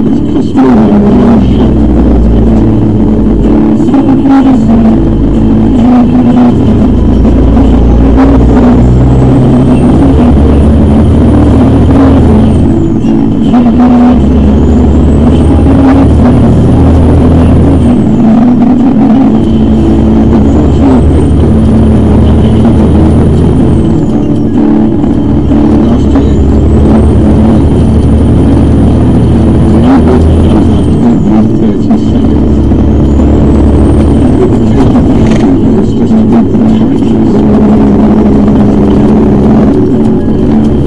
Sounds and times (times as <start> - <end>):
Motor vehicle (road): 0.0 - 40.8
Music: 0.0 - 40.8
Speech: 0.1 - 1.8, 29.8 - 32.7, 34.2 - 38.3.